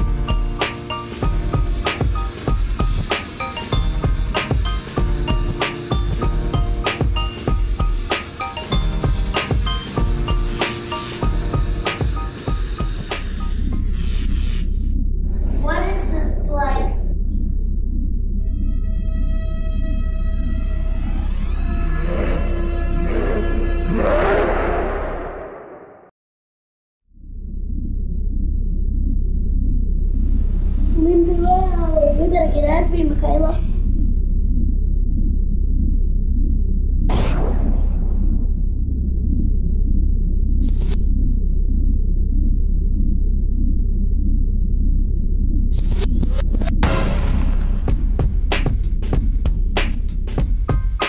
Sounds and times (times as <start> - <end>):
Music: 0.0 - 17.6, 18.2 - 24.3, 45.7 - 51.0
Speech: 15.6 - 17.2, 31.0 - 33.7
Whale vocalization: 21.0 - 26.0.